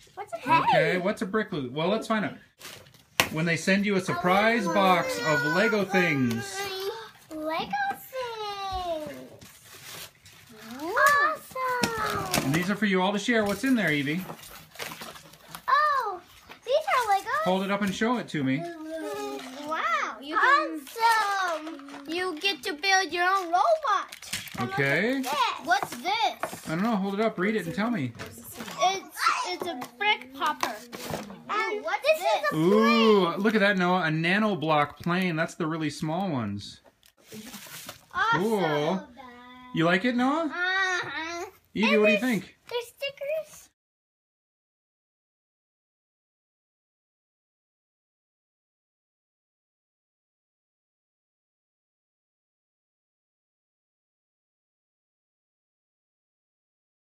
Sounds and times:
Child speech, kid speaking: 0.0 - 1.1, 3.9 - 9.4, 10.5 - 12.7, 15.6 - 33.7, 37.3 - 39.8, 40.4 - 43.8.

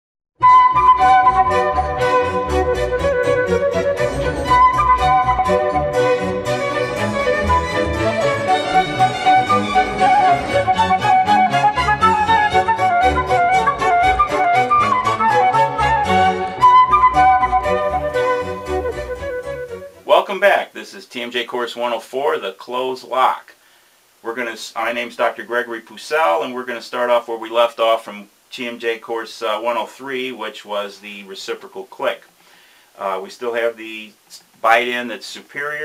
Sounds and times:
Flute: 0.4 - 20.3.

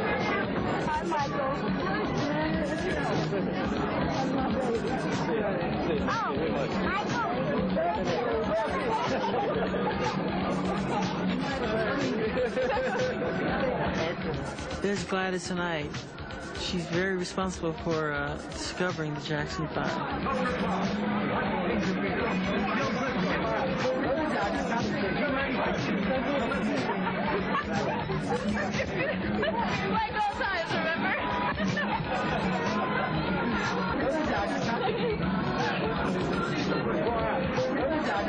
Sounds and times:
Inside, large room or hall: 0.0 - 15.1, 15.8 - 38.2
Music: 0.0 - 38.2
Speech: 0.0 - 38.2.

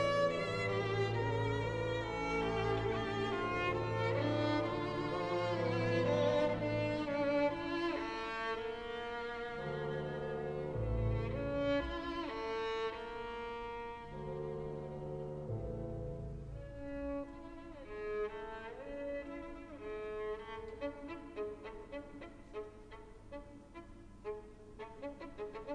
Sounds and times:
Classical music: 0.0 - 25.7
Orchestra: 0.0 - 25.7
Violin, fiddle: 0.0 - 25.7.

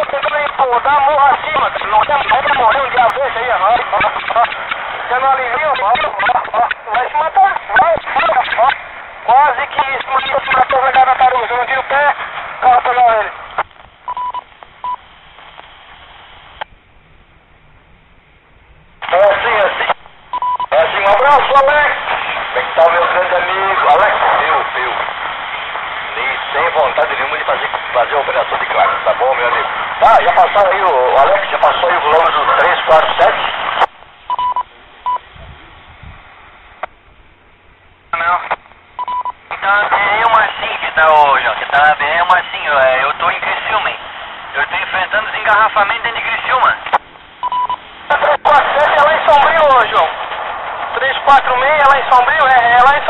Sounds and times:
Speech: 0.0 - 13.4, 19.0 - 20.0, 20.7 - 25.2, 26.1 - 33.6, 38.1 - 38.6, 39.5 - 47.0, 48.1 - 50.2, 51.0 - 53.1
Radio: 0.0 - 16.7, 19.0 - 35.8, 38.1 - 53.1.

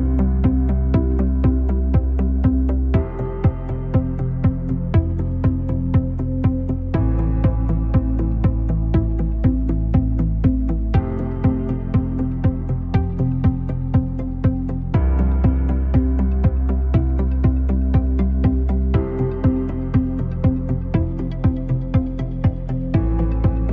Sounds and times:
Music: 0.0 - 23.7.

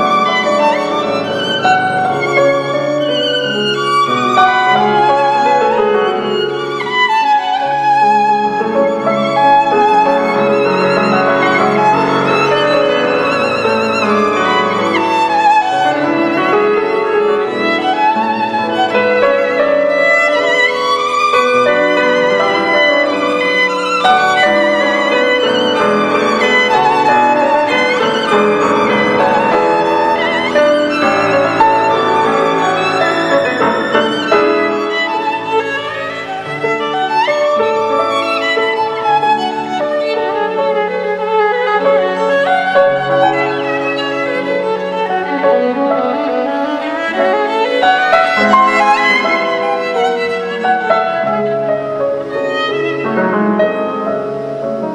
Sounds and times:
Violin, fiddle: 0.0 - 54.9.

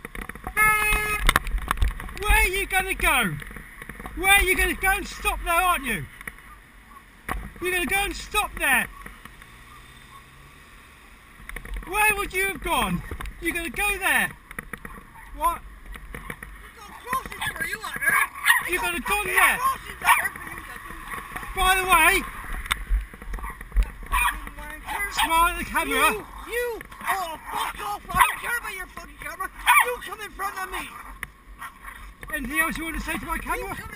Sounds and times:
Speech: 2.2 - 3.4, 4.2 - 6.1, 7.6 - 8.9, 11.9 - 14.4, 16.7 - 20.9, 21.5 - 22.3, 24.4 - 31.1, 32.3 - 33.9.

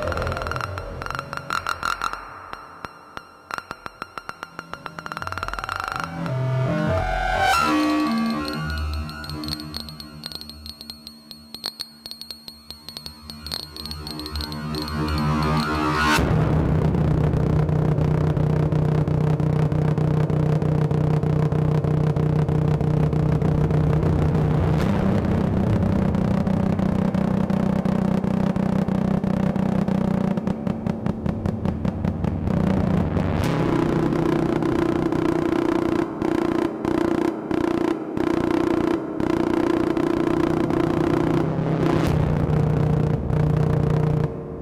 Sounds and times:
Throbbing: 0.0 - 44.6
Vibration: 0.0 - 44.6.

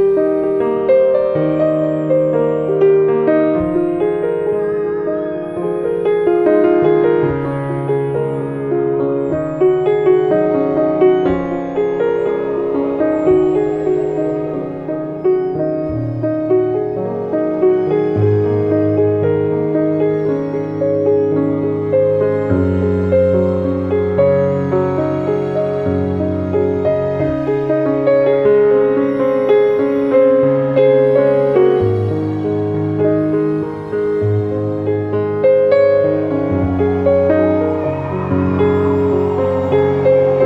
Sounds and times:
Music: 0.0 - 40.4.

